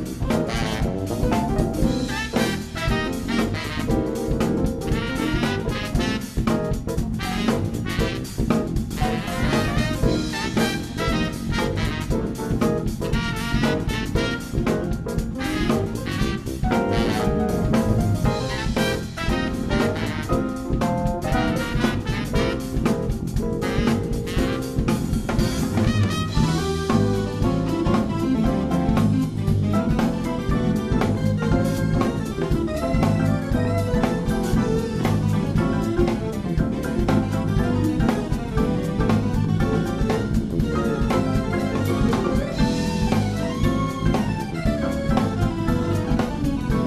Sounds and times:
Jazz: 0.0 - 46.8
Musical instrument: 0.0 - 46.8.

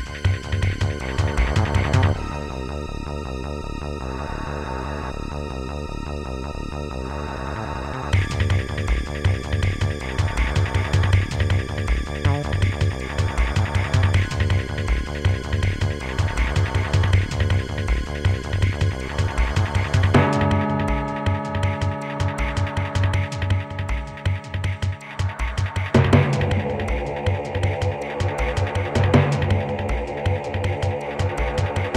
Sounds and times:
Music: 0.0 - 31.9.

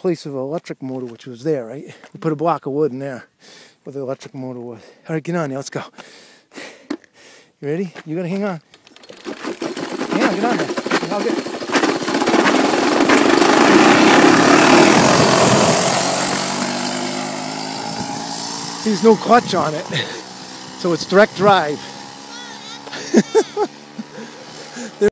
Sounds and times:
Speech: 0.0 - 3.3, 3.9 - 5.9, 7.6 - 8.6, 10.1 - 11.4, 18.8 - 19.9, 20.8 - 21.9
Heavy engine (low frequency): 9.1 - 20.8.

